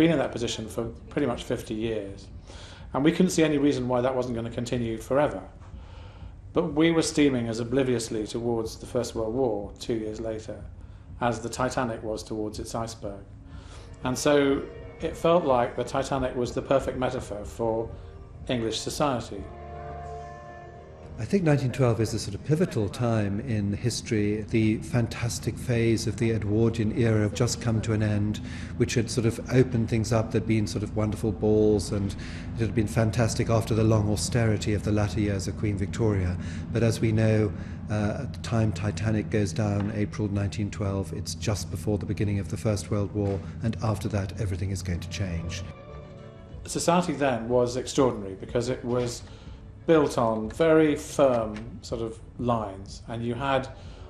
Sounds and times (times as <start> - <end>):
Speech: 0.0 - 5.6, 6.5 - 13.3, 14.0 - 19.5, 21.2 - 45.7, 46.7 - 49.3, 49.9 - 53.8
Music: 0.0 - 54.1.